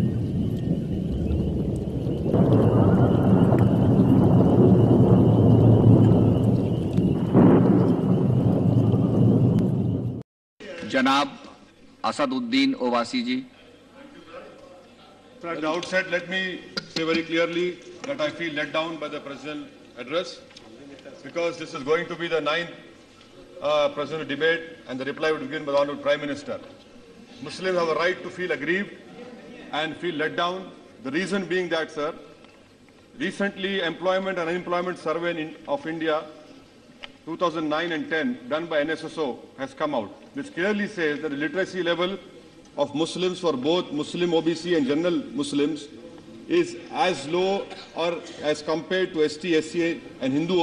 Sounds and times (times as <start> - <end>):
Male speech, man speaking: 10.6 - 22.8, 23.6 - 26.7, 27.4 - 32.2, 33.2 - 36.4, 37.3 - 42.2, 42.8 - 50.6
Narration, monologue: 10.6 - 50.6.